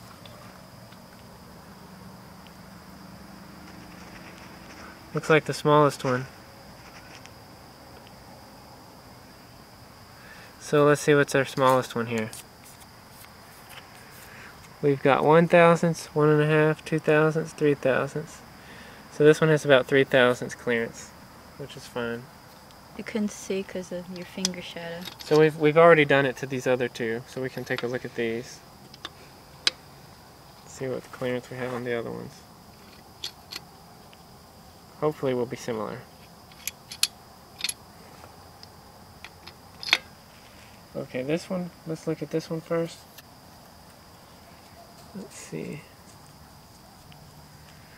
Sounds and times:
Speech: 0:10.6 - 0:12.4, 0:14.8 - 0:18.4, 0:23.0 - 0:28.6, 0:30.7 - 0:32.4, 0:35.0 - 0:36.1, 0:41.0 - 0:43.0, 0:45.2 - 0:45.9.

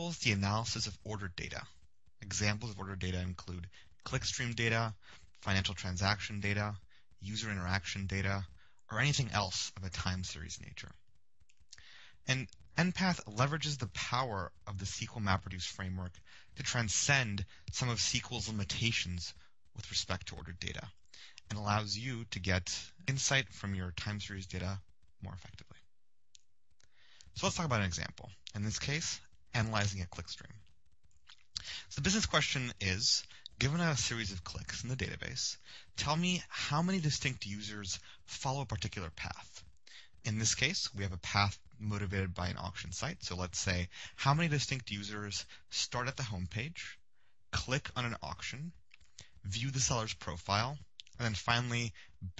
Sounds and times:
Speech: 0:00.0 - 0:11.0, 0:12.2 - 0:25.8, 0:27.2 - 0:30.6, 0:31.5 - 0:52.3.

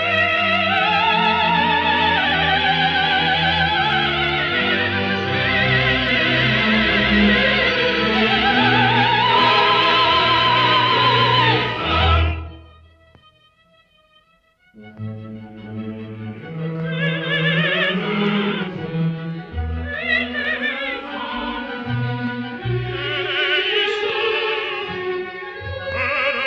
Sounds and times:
Opera: 0:00.0 - 0:13.0, 0:14.8 - 0:26.4.

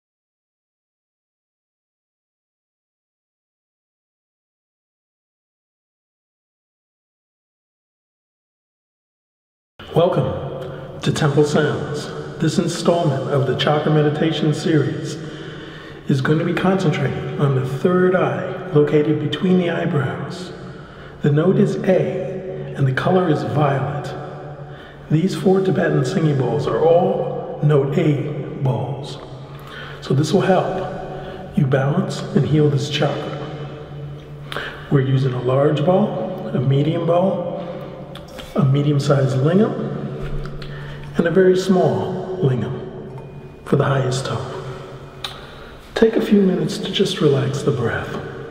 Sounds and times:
Speech: 0:09.8 - 0:24.4, 0:25.1 - 0:29.3, 0:30.0 - 0:33.6, 0:34.6 - 0:43.1, 0:43.7 - 0:44.9, 0:46.0 - 0:48.5.

